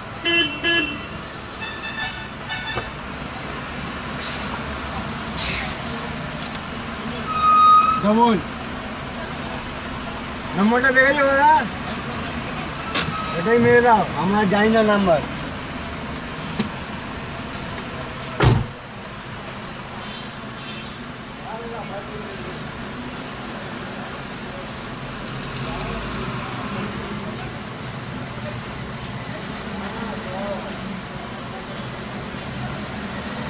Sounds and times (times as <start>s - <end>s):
Traffic noise, roadway noise: 0.0s - 33.4s.